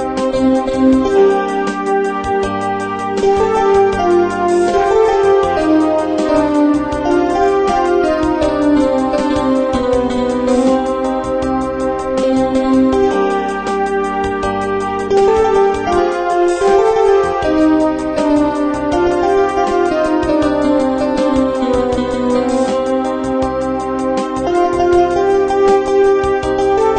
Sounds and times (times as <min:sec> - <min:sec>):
Music: 0:00.0 - 0:26.9.